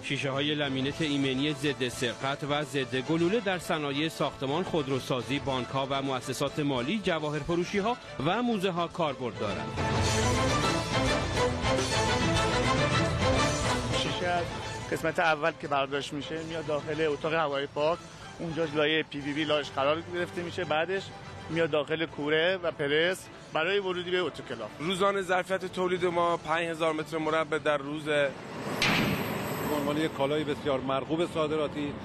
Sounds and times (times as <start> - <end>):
Speech: 0.0 - 9.7, 14.0 - 28.3, 29.6 - 32.0
Music: 0.0 - 32.0.